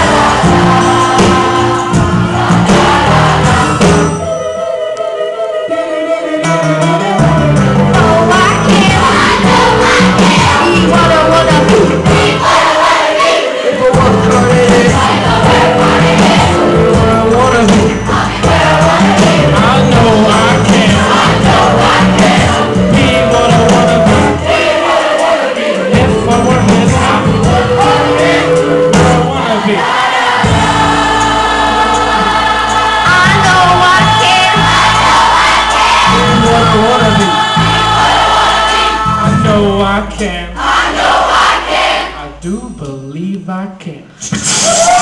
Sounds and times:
Music: 0.0 - 45.0.

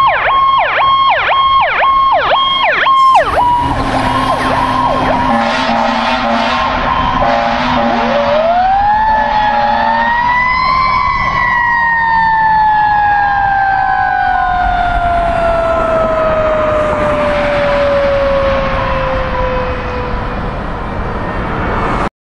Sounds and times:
Fire engine, fire truck (siren): 0.0 - 22.1.

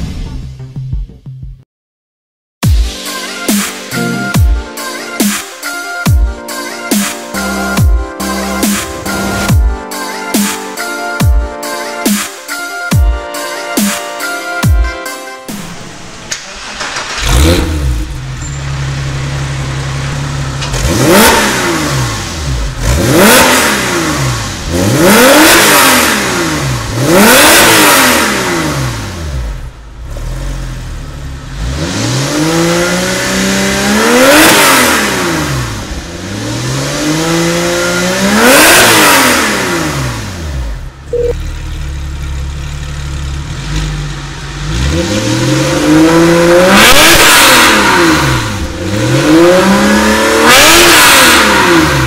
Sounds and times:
Car: 7.4 - 9.8, 15.5 - 52.0
Accelerating, revving, vroom: 17.0 - 18.1, 20.6 - 40.8, 43.4 - 52.0.

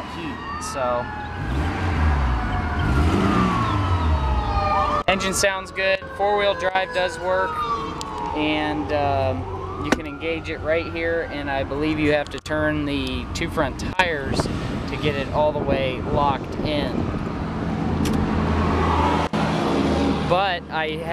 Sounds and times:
Police car (siren): 0.0 - 14.0.

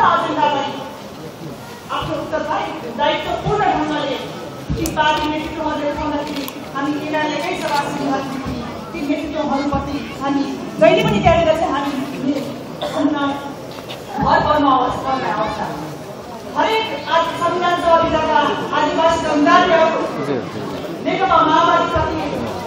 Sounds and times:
Female speech, woman speaking: 0.0 - 1.0, 1.9 - 16.0, 16.6 - 20.2, 21.0 - 22.6.

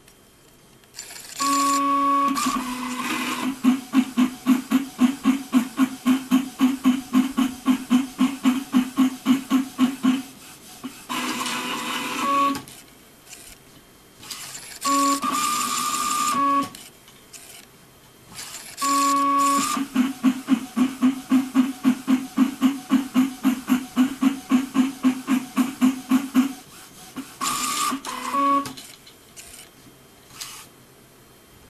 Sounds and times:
Printer: 0.9 - 17.7, 18.3 - 30.8.

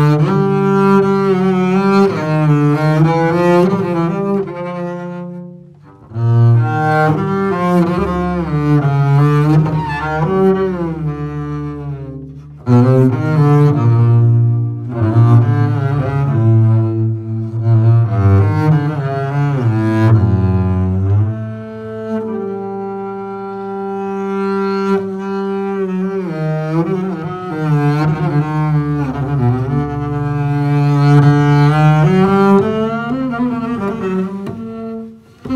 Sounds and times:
Cello: 0.0 - 35.5
Double bass: 0.0 - 35.5.

